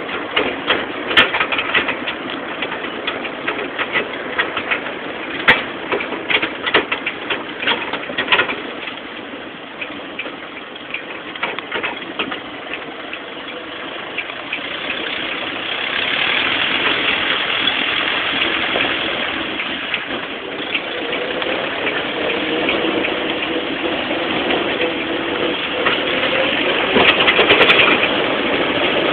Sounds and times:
Vehicle: 0.0 - 29.1.

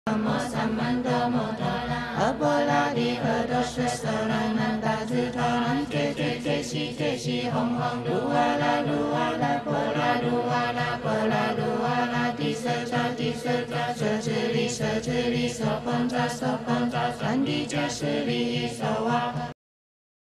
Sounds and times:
Mantra: 0.1 - 19.6.

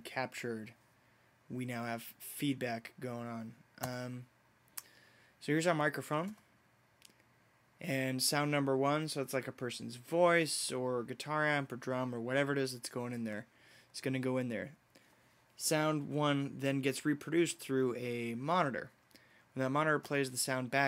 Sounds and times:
Speech: 0.0 - 0.8, 1.5 - 4.3, 5.4 - 6.4, 7.8 - 14.8, 15.6 - 19.0, 19.6 - 20.8.

